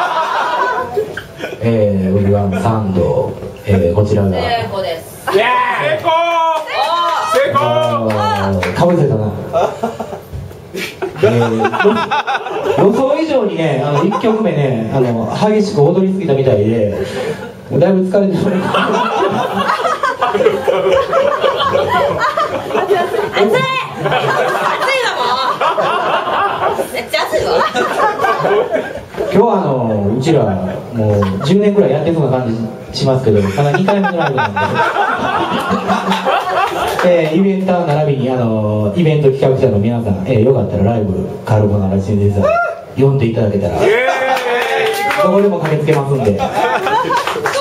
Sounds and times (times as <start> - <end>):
Male speech, man speaking: 1.6 - 4.7, 5.3 - 6.8, 7.4 - 9.4, 11.2 - 12.0, 12.8 - 17.0, 17.7 - 18.8, 29.3 - 34.6, 37.0 - 46.6.